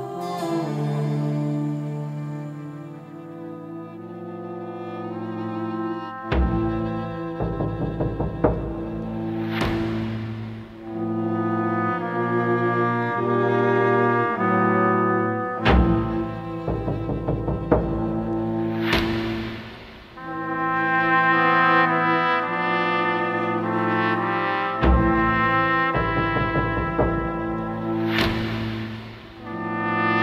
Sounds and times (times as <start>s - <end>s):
Music: 0.0s - 30.2s.